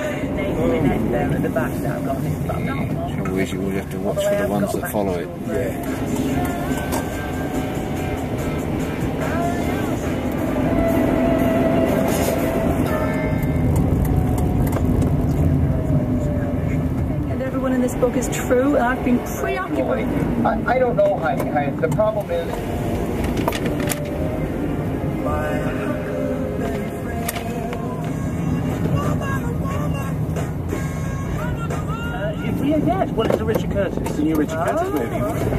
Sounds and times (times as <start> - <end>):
Music: 5.3 - 14.1, 23.8 - 35.5.